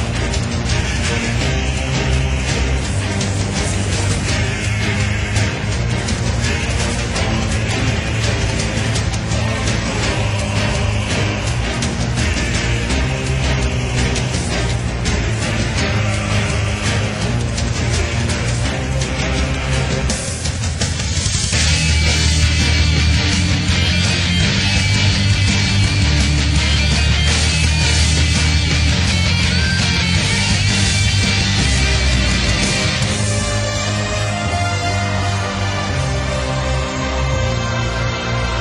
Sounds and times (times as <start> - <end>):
Music: 0.0 - 38.6.